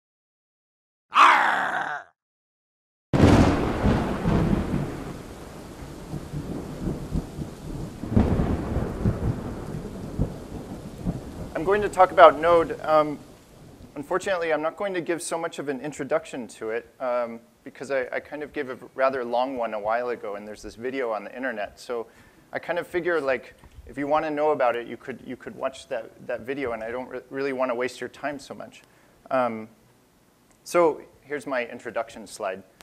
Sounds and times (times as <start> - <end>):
Thunder: 3.2 - 12.8
Rain: 3.2 - 27.6.